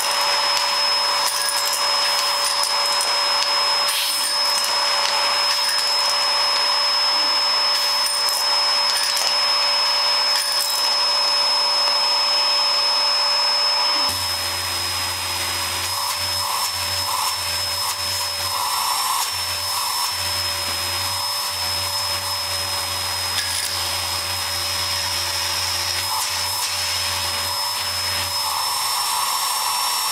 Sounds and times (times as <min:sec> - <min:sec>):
Vacuum cleaner: 0:00.0 - 0:30.1.